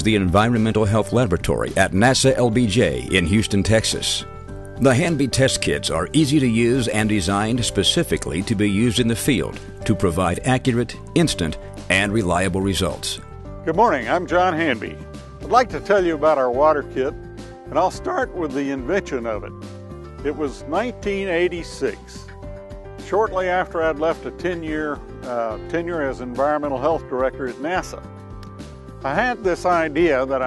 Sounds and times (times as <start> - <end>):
Speech: 0.0 - 4.2, 4.8 - 17.1, 17.7 - 19.5, 20.2 - 22.2, 23.1 - 28.0, 29.1 - 30.4
Music: 0.0 - 30.4.